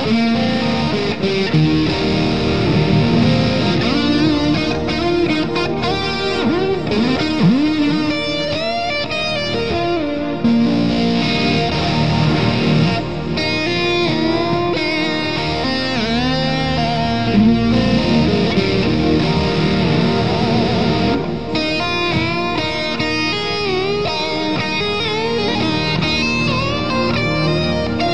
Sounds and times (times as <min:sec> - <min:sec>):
Electric guitar: 0:00.0 - 0:28.1.